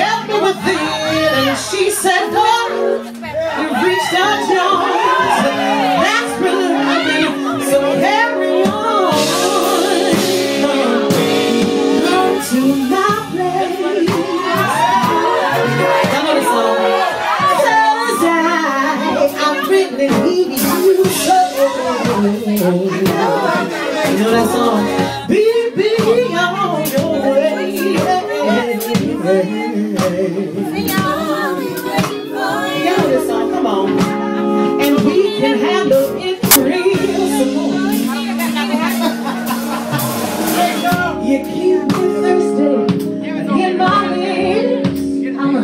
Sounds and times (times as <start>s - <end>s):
Music: 0.0s - 45.6s.